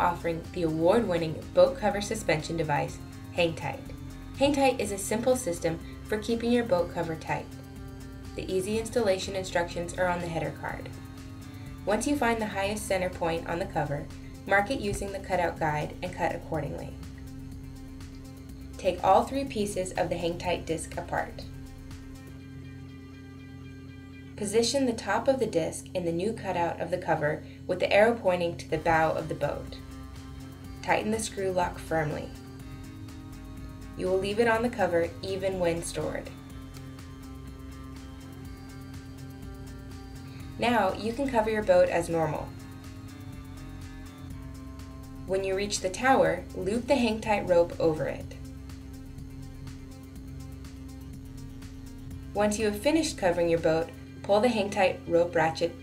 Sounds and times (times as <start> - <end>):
Speech: 0.0 - 7.5, 8.4 - 10.9, 11.9 - 17.0, 18.8 - 21.5, 24.4 - 29.8, 30.8 - 32.4, 34.0 - 36.3, 40.6 - 42.6, 45.3 - 48.4, 52.4 - 55.8
Music: 0.0 - 55.8.